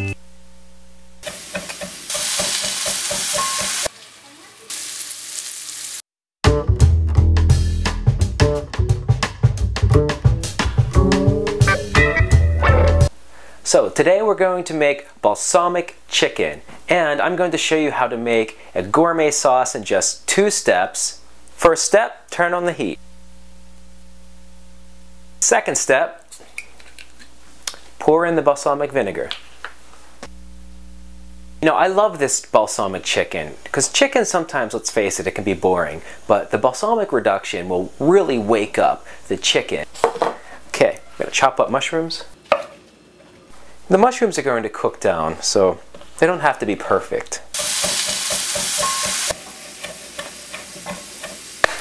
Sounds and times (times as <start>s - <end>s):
Music: 0.0s - 0.2s, 6.4s - 13.2s
Speech: 4.2s - 4.8s, 13.6s - 23.0s, 25.4s - 26.3s, 28.0s - 29.4s, 31.6s - 39.9s, 40.7s - 42.4s, 43.9s - 47.5s.